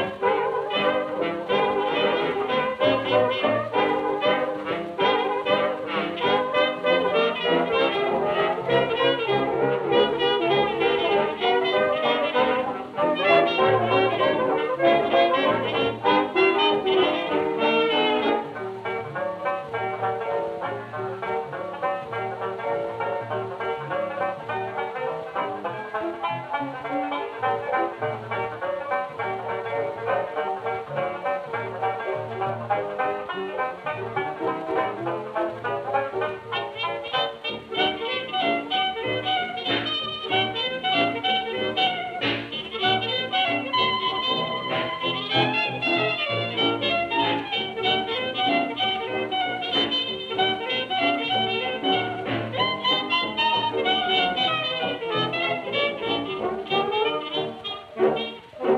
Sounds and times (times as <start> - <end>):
Music: 0.0 - 58.7.